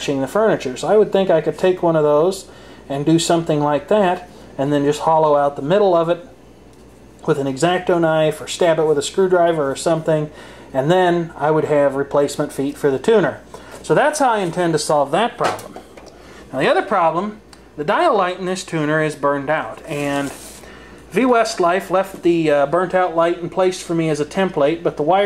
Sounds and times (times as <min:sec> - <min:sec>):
Speech: 0:00.0 - 0:06.4, 0:07.2 - 0:15.8, 0:16.5 - 0:25.2.